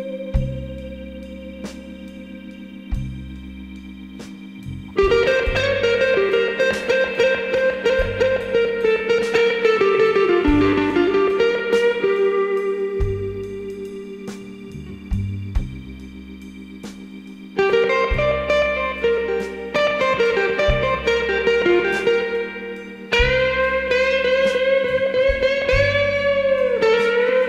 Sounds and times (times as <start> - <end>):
Music: 0.0 - 27.4.